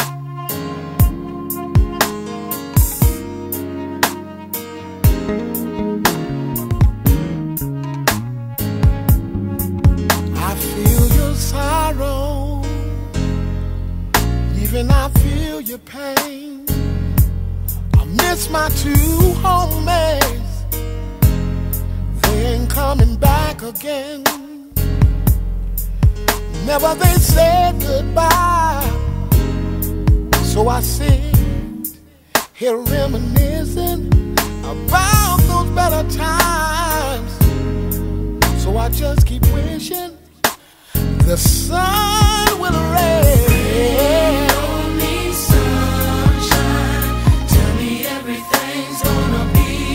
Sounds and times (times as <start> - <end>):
Music: 0.0 - 49.9.